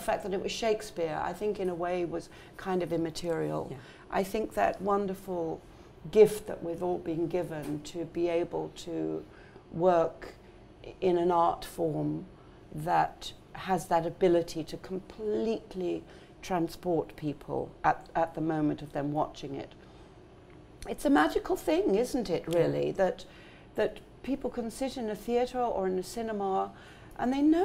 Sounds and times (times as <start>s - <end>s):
Speech: 0.0s - 9.2s, 9.8s - 19.8s, 20.8s - 27.6s.